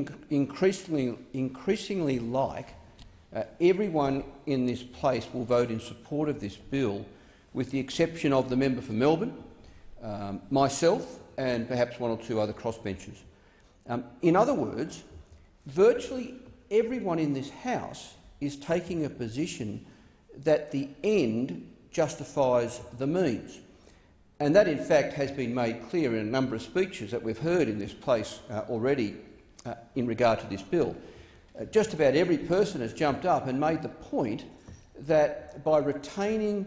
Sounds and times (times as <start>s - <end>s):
Male speech, man speaking: 0.0s - 2.8s, 3.4s - 9.4s, 10.0s - 13.2s, 13.9s - 15.1s, 15.7s - 19.8s, 20.4s - 23.6s, 24.4s - 31.0s, 31.6s - 36.6s
Narration, monologue: 0.0s - 36.6s.